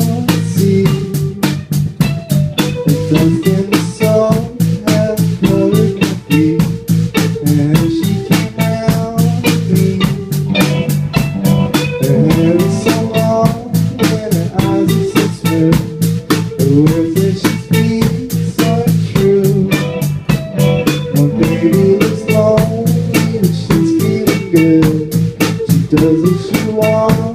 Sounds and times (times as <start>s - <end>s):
Music: 0.0s - 27.3s.